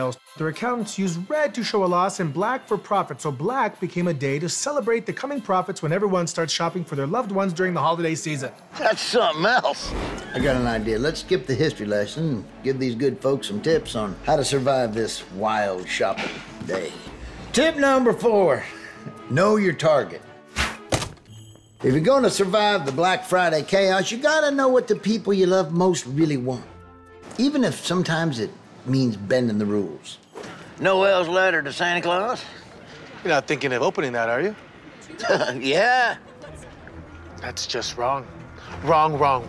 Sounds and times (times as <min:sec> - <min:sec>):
Music: 0:00.0 - 0:32.5, 0:33.9 - 0:39.4.